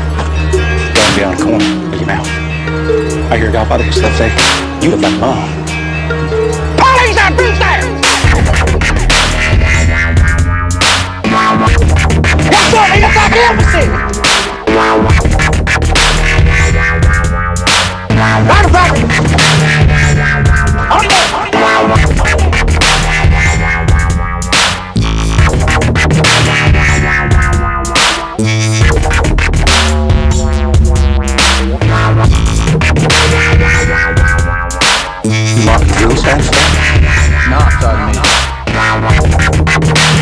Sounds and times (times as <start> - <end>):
Dubstep: 6.8 - 40.2.